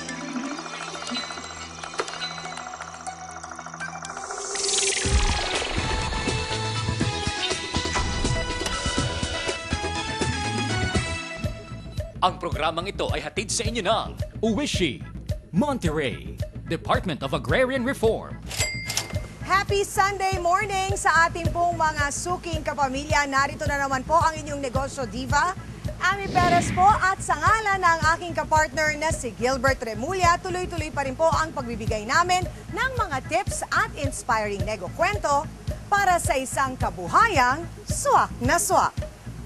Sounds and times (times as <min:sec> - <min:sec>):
Music: 0:00.0 - 0:39.4.